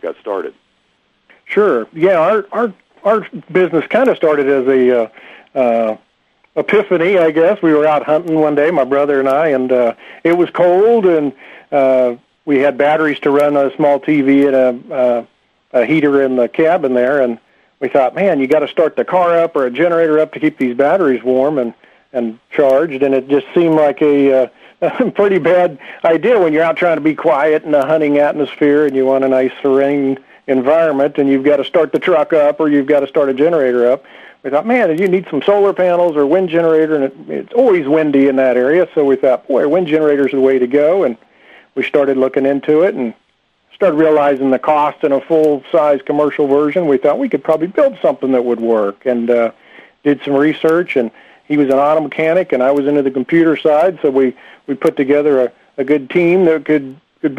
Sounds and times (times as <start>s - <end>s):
Speech: 0.0s - 0.6s, 1.3s - 6.0s, 6.6s - 57.3s.